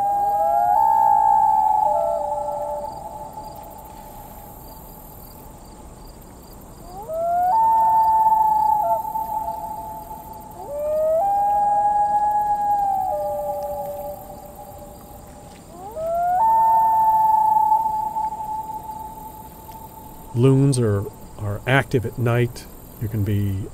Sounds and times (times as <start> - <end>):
Speech: 20.4 - 23.7.